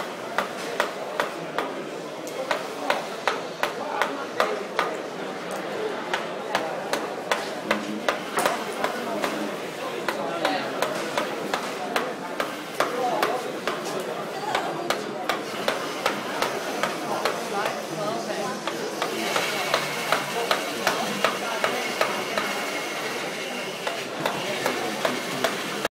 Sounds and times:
Speech: 0.0s - 25.9s.

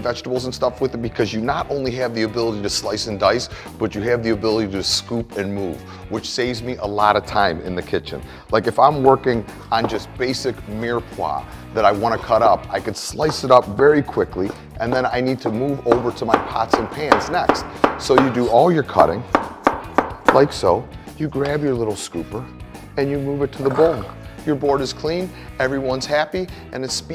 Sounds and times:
Speech: 0.0s - 19.3s, 20.3s - 27.1s
Music: 0.0s - 27.1s.

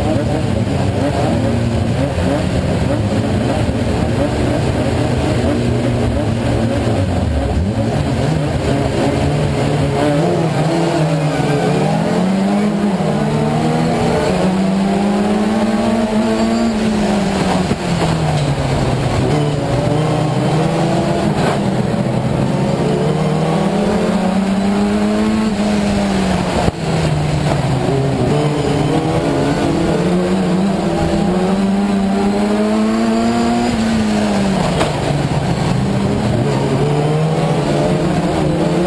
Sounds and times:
Car: 0.0s - 38.8s.

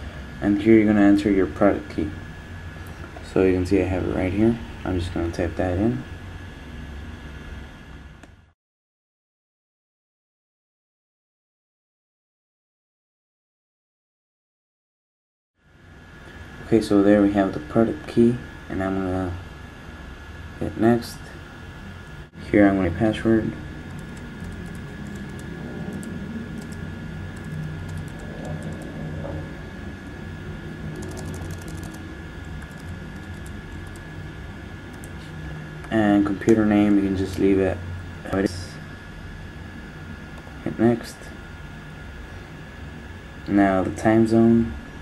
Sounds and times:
Speech: 0.4s - 2.2s, 3.2s - 6.1s, 16.7s - 19.4s, 20.6s - 21.4s, 22.4s - 23.6s, 35.9s - 38.8s, 40.6s - 41.4s, 43.5s - 44.8s.

